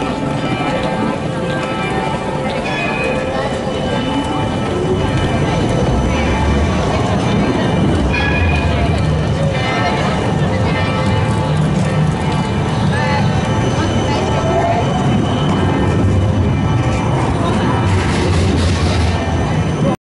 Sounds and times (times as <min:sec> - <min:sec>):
Speech: 0:00.0 - 0:16.1, 0:16.9 - 0:20.0
Vehicle: 0:00.0 - 0:20.0.